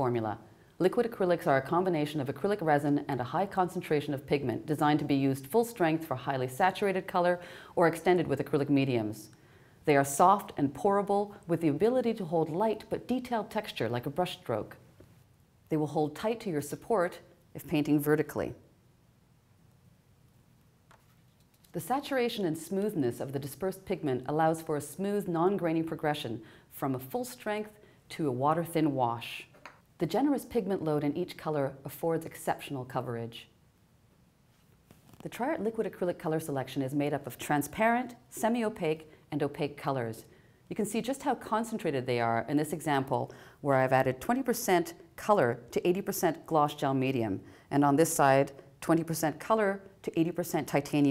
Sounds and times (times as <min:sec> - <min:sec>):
Speech: 0:00.0 - 0:09.3, 0:09.9 - 0:14.8, 0:15.7 - 0:18.7, 0:21.7 - 0:33.6, 0:35.2 - 0:51.1.